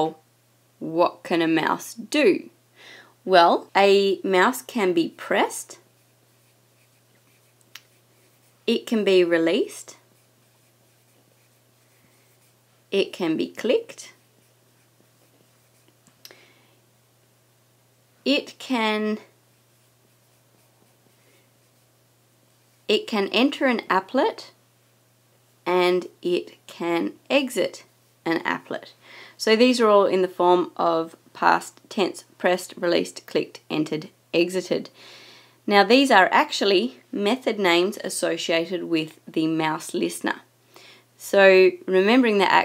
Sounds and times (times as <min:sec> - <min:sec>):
Speech: 0:00.0 - 0:00.2, 0:00.8 - 0:02.6, 0:03.3 - 0:05.8, 0:08.7 - 0:10.0, 0:13.0 - 0:14.2, 0:18.3 - 0:19.3, 0:22.9 - 0:24.6, 0:25.7 - 0:34.9, 0:35.7 - 0:40.5, 0:41.2 - 0:42.6.